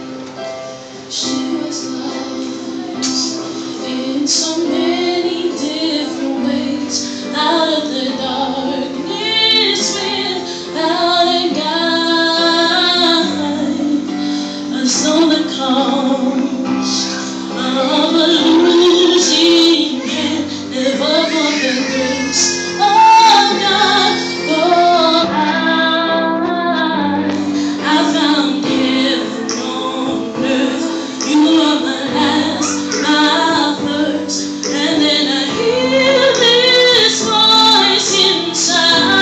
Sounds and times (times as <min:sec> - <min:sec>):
Inside, large room or hall: 0:00.0 - 0:39.2
Music: 0:00.0 - 0:39.2
Singing: 0:01.1 - 0:39.2.